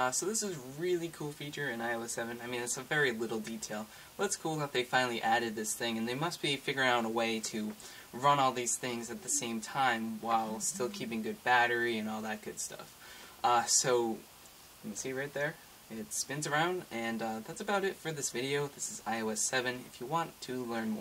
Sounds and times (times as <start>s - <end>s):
Speech: 0.0s - 14.2s, 14.8s - 21.0s.